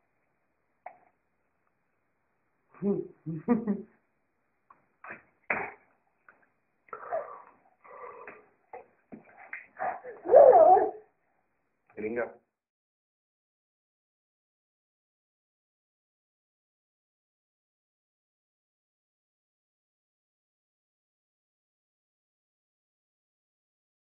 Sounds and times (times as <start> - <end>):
Dog: 9.3 - 11.0
Speech: 12.0 - 12.5.